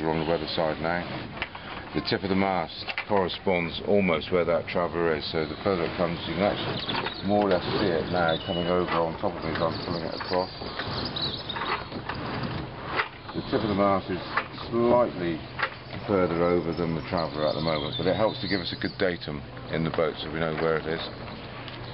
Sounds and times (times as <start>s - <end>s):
Ratchet, pawl: 5.6s - 14.6s.